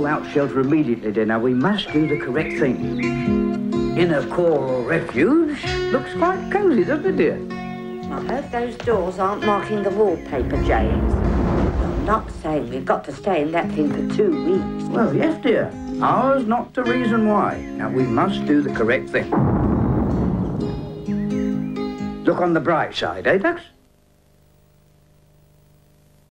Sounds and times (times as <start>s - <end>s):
Speech: 0.0s - 2.8s, 4.0s - 7.4s, 8.1s - 11.0s, 12.2s - 19.3s, 22.2s - 23.8s
Music: 0.0s - 23.8s.